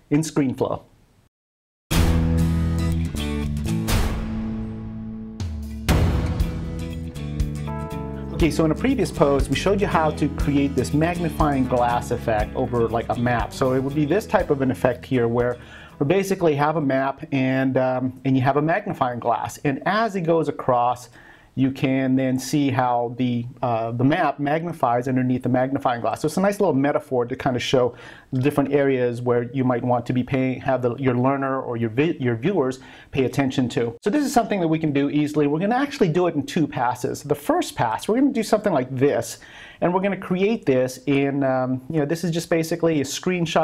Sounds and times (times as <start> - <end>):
Speech: 0.0 - 0.9, 8.4 - 43.6.